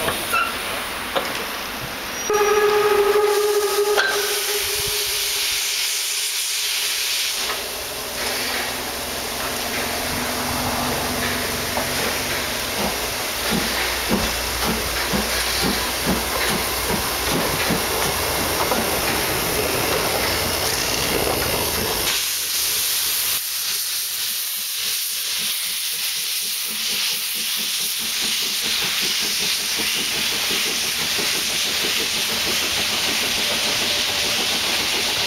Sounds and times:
Steam whistle: 0:02.2 - 0:07.6
Hiss: 0:03.3 - 0:35.2.

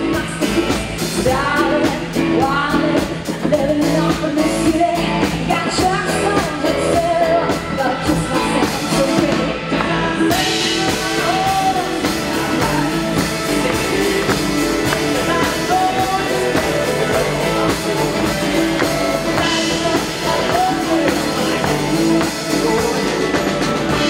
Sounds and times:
Country: 0:00.0 - 0:24.1.

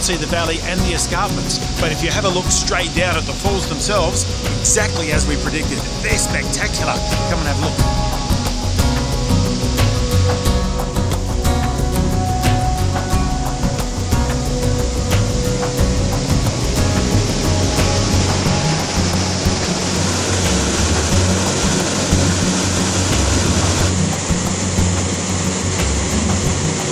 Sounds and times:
Music: 0:00.0 - 0:26.9
Waterfall: 0:00.0 - 0:26.9.

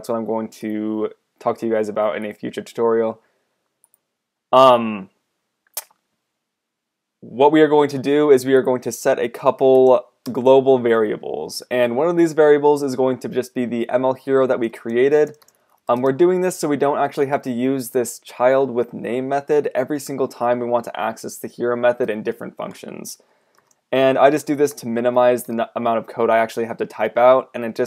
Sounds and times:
Speech: 0:00.0 - 0:03.2, 0:04.6 - 0:05.2, 0:07.2 - 0:23.2, 0:23.9 - 0:27.8.

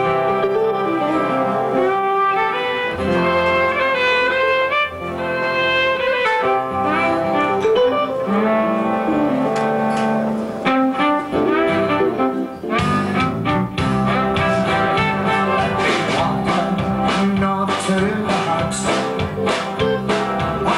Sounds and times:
Music: 0:00.0 - 0:20.7.

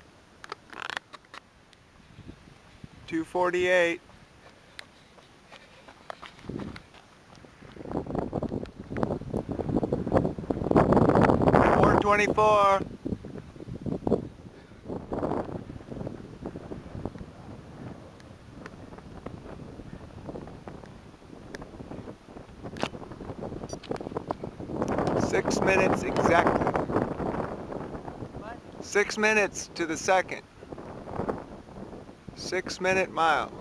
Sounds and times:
Speech: 0:03.1 - 0:04.0, 0:11.6 - 0:12.8, 0:25.2 - 0:26.6, 0:28.4 - 0:30.4, 0:32.4 - 0:33.6.

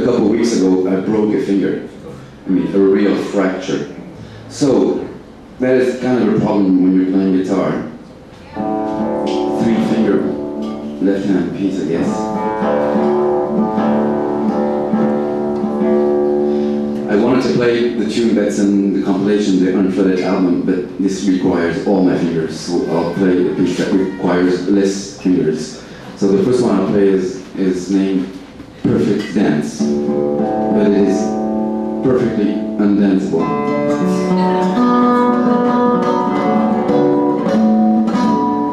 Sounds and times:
Speech: 0:00.0 - 0:08.7, 0:09.5 - 0:10.4, 0:11.0 - 0:12.4, 0:17.1 - 0:29.9, 0:30.7 - 0:31.4, 0:32.0 - 0:34.3
Acoustic guitar: 0:00.0 - 0:38.7
Strum: 0:08.4 - 0:19.4, 0:28.3 - 0:38.7.

